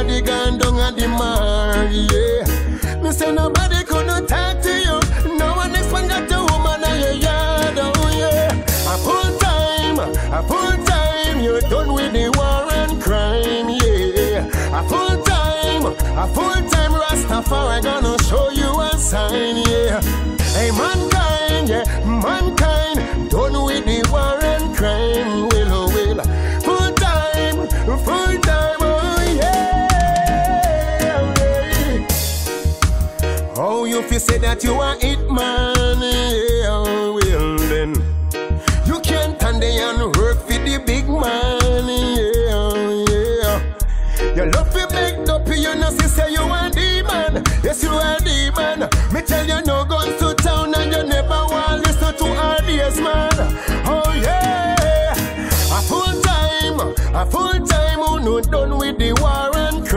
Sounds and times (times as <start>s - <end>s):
Reggae: 0.0s - 59.9s.